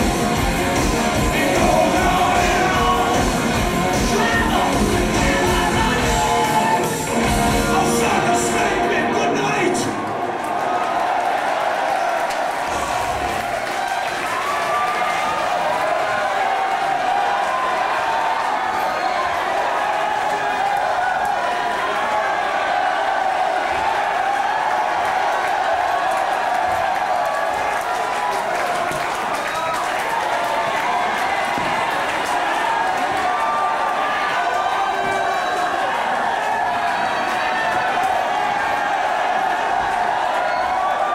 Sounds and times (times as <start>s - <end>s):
Music: 0.0s - 10.6s
Inside, large room or hall: 0.0s - 41.1s
Singing: 0.8s - 9.8s.